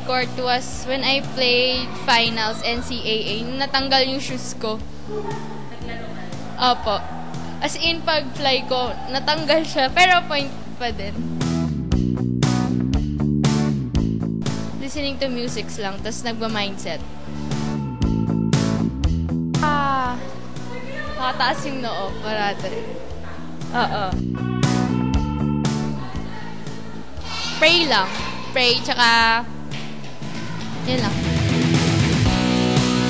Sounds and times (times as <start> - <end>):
Speech: 0.0 - 4.8, 14.8 - 17.0, 27.6 - 29.4
Music: 0.0 - 33.0.